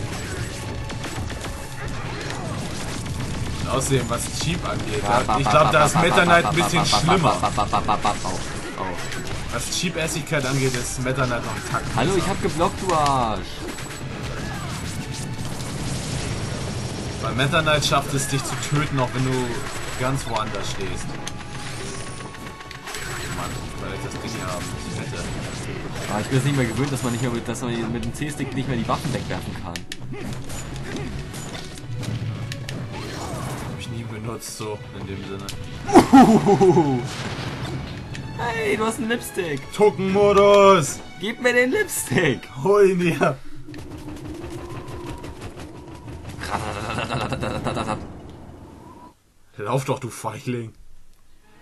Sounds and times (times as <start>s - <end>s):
Music: 0.0s - 46.5s.